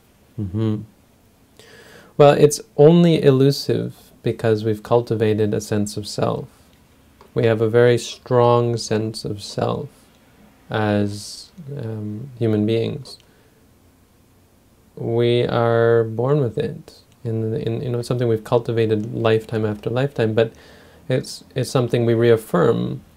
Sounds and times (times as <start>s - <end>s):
Speech: 2.2s - 6.6s, 7.3s - 10.0s, 10.7s - 13.2s, 15.0s - 23.1s.